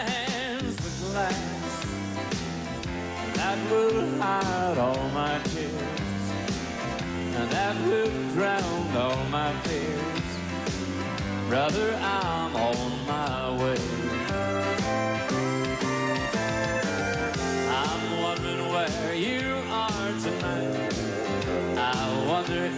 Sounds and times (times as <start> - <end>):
Music: 0.0 - 22.7.